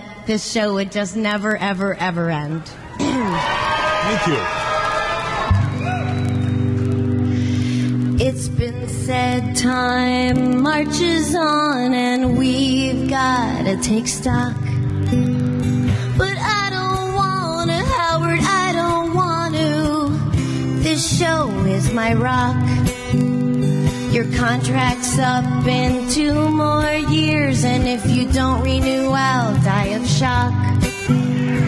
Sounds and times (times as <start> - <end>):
Speech: 4.0 - 4.5
Music: 5.4 - 31.6.